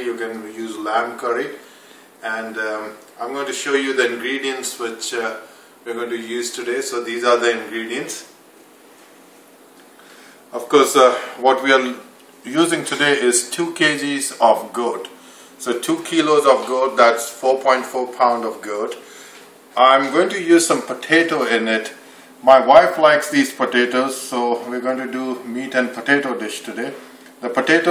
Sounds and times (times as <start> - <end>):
Speech: 0.0 - 1.6, 2.2 - 8.4, 10.5 - 19.1, 19.8 - 27.9.